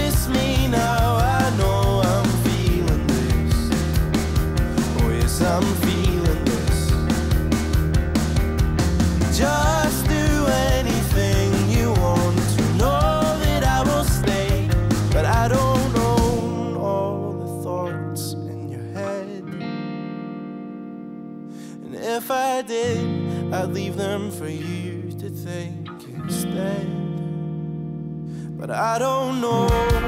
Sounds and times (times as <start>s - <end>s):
Singing: 0.0s - 3.7s, 4.9s - 7.0s, 9.3s - 19.6s, 28.6s - 30.0s
Music: 0.0s - 30.0s.